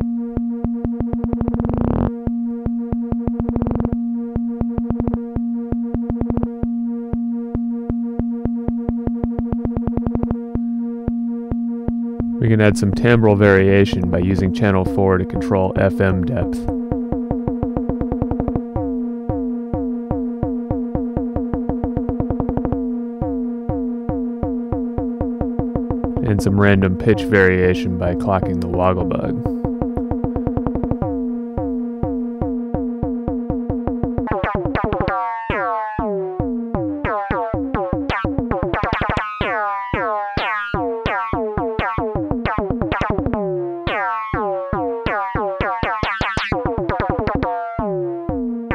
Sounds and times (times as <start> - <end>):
Synthesizer: 0.0 - 48.7
Speech: 12.4 - 16.7, 26.2 - 29.5.